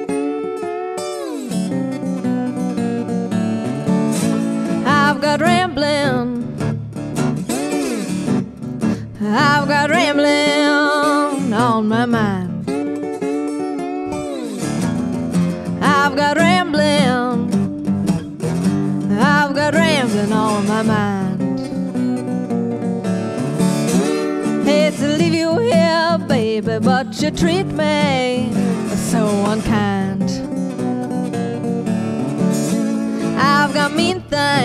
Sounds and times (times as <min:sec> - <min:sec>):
Acoustic guitar: 0:00.0 - 0:34.6.